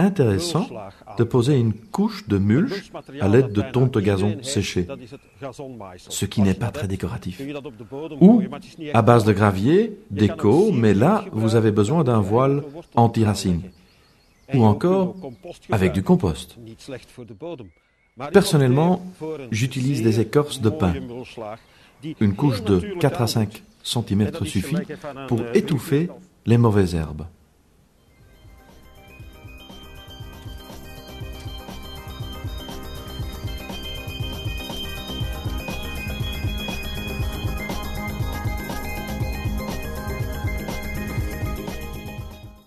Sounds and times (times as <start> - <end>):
Speech: 0.0 - 13.8, 14.5 - 27.4.